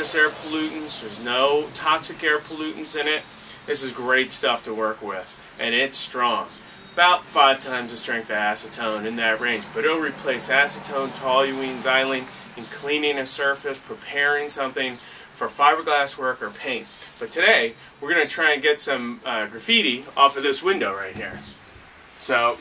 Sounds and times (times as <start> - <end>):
Speech: 0.0 - 21.6, 22.2 - 22.6.